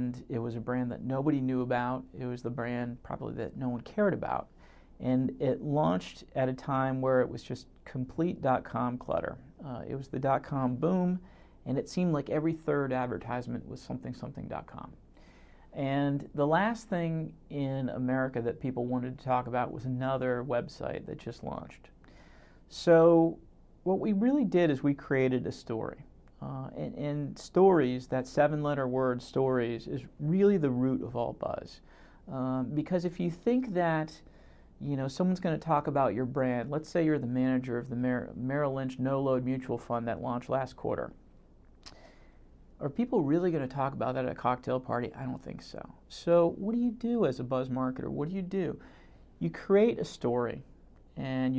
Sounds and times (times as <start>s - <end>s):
Speech: 0.0s - 15.0s, 15.7s - 22.0s, 22.7s - 41.2s, 42.8s - 51.5s.